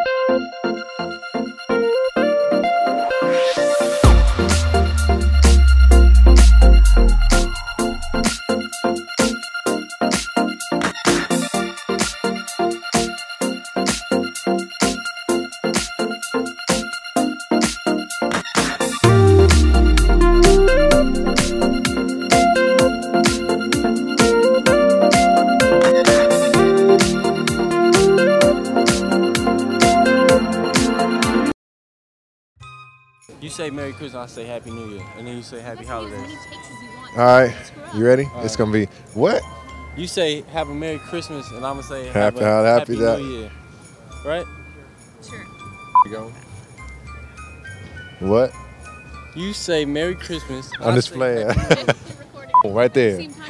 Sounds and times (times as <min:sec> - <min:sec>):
Outside, urban or manmade: 0:00.0 - 0:30.3, 0:35.0 - 0:49.8
Music: 0:00.0 - 0:31.6, 0:32.6 - 0:53.4
Speech: 0:33.4 - 0:43.6, 0:44.2 - 0:46.4, 0:49.4 - 0:53.4.